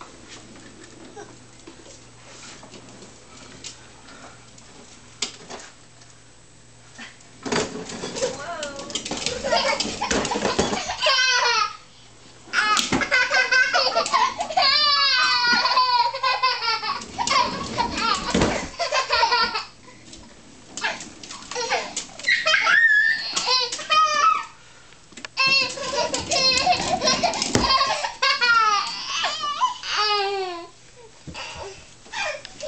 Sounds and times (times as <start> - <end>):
Inside, small room: 0.0 - 32.6.